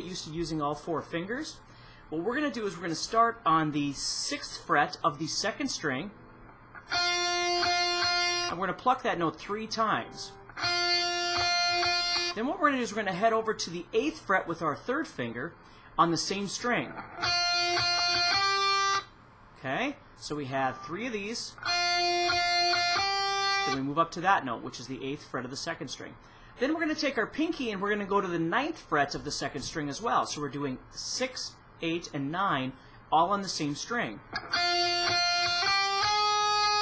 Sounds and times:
Speech: 0.0s - 6.2s, 8.5s - 10.4s, 12.3s - 17.0s, 19.6s - 21.6s, 23.7s - 34.3s
Guitar: 0.0s - 30.8s, 32.8s - 36.8s.

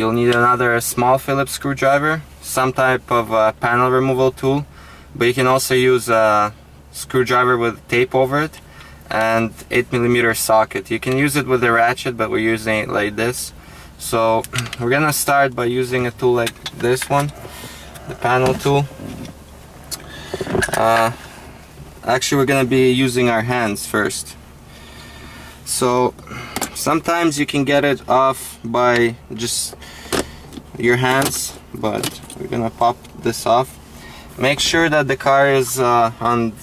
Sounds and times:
Speech: 0.0s - 17.3s, 18.2s - 18.9s, 20.8s - 21.2s, 22.0s - 24.4s, 25.7s - 26.2s, 26.8s - 29.8s, 30.8s - 33.8s, 34.4s - 36.6s.

